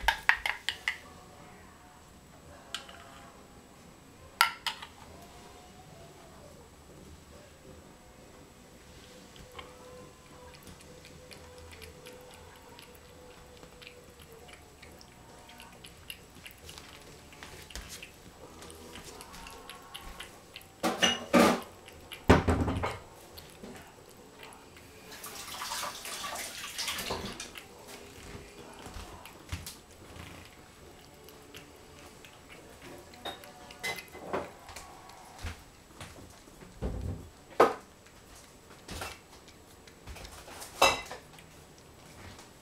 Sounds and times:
Inside, small room: 0.0s - 42.6s.

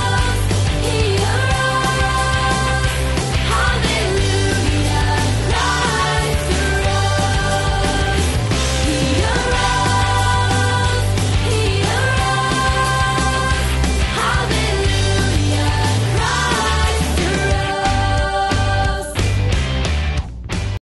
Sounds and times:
Happy music: 0.0s - 20.8s.

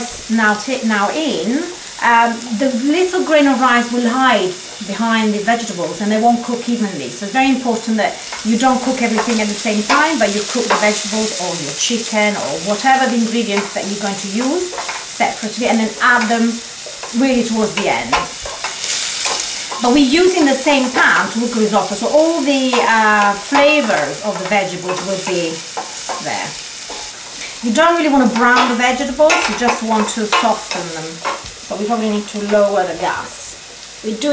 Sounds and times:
Speech: 0.0s - 18.3s, 19.8s - 26.6s, 27.6s - 34.3s.

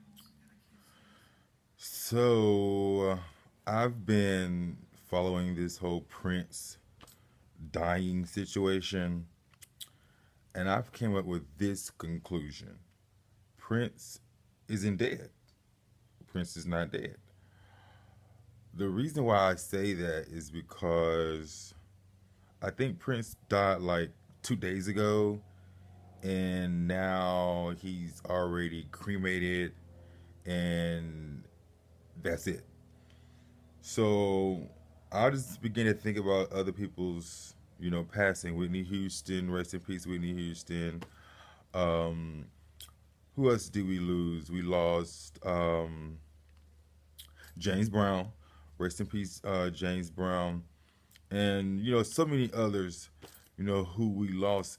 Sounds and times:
Speech: 1.8s - 6.8s, 7.6s - 9.3s, 10.5s - 12.9s, 13.6s - 15.4s, 16.2s - 17.2s, 18.8s - 21.8s, 22.6s - 25.4s, 26.2s - 29.8s, 30.5s - 31.5s, 32.2s - 32.7s, 33.8s - 41.1s, 41.8s - 46.2s, 47.2s - 54.7s.

